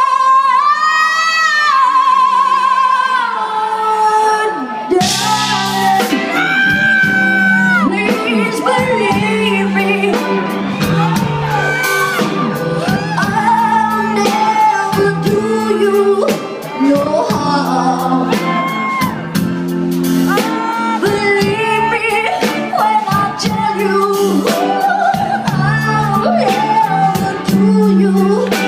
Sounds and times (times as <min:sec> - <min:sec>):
Music: 0:00.0 - 0:28.6.